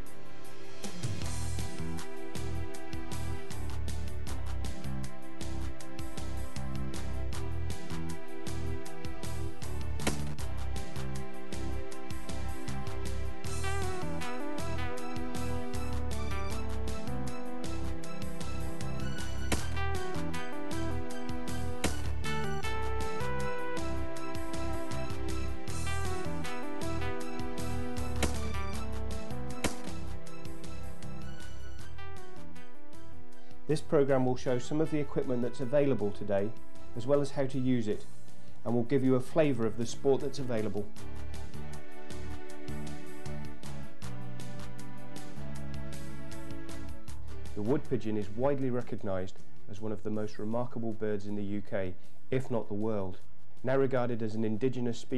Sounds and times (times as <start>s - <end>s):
Music: 0.0s - 55.1s.